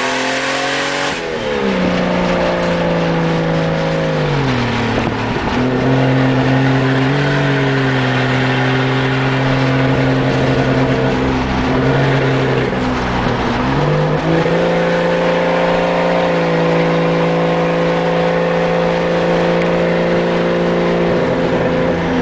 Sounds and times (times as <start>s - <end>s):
Car: 0.0s - 22.2s
Outside, rural or natural: 0.0s - 22.2s.